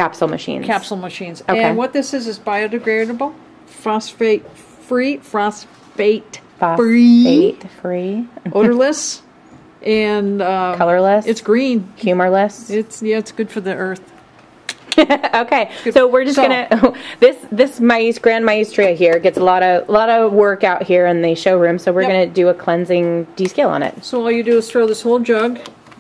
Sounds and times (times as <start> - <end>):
Speech: 0.0 - 14.0.